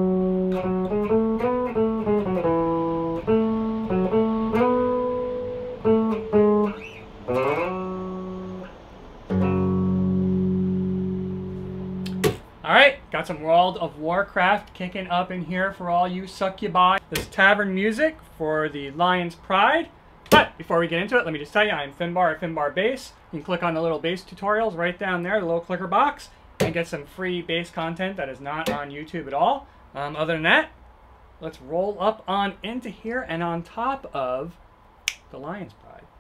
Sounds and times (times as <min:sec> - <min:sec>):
Electric guitar: 0:00.0 - 0:12.4
Strum: 0:00.0 - 0:12.5.